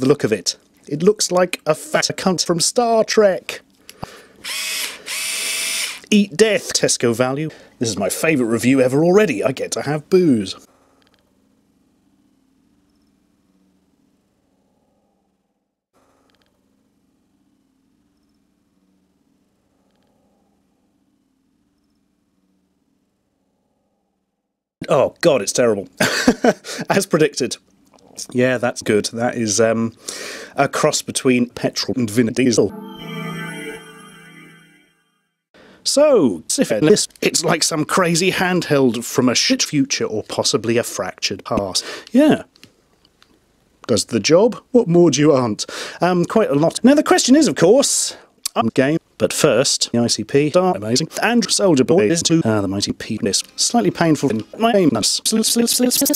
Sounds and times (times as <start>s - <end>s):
Drill: 4.4s - 6.1s.